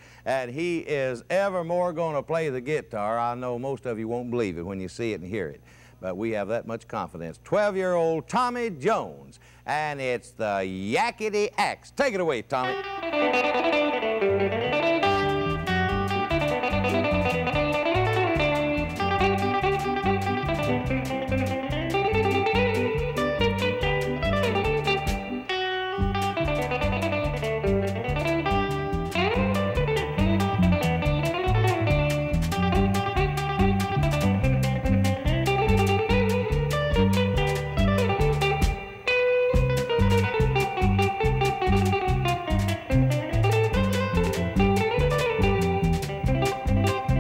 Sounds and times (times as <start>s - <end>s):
New-age music: 14.4s - 47.2s.